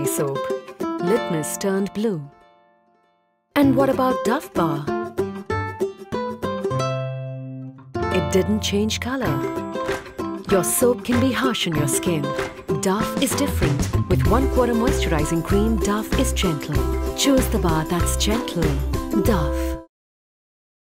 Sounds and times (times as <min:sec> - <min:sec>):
Speech: 0:00.0 - 0:00.5, 0:01.1 - 0:02.3, 0:03.6 - 0:04.9, 0:08.1 - 0:09.4, 0:10.5 - 0:19.9
Music: 0:00.0 - 0:19.9.